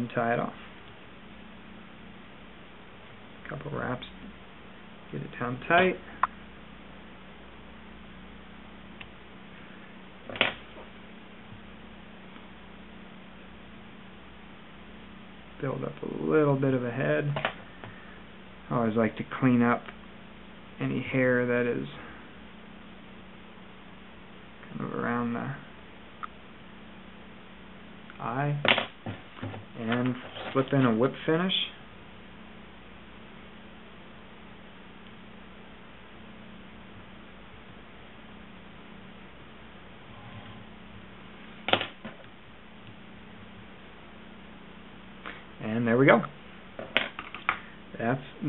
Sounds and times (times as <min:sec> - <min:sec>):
Speech: 0:00.0 - 0:00.6, 0:03.4 - 0:04.2, 0:05.1 - 0:06.1, 0:15.6 - 0:17.4, 0:18.7 - 0:20.0, 0:20.8 - 0:22.1, 0:24.6 - 0:25.7, 0:28.1 - 0:28.7, 0:29.8 - 0:31.8, 0:45.6 - 0:46.4, 0:47.9 - 0:48.4.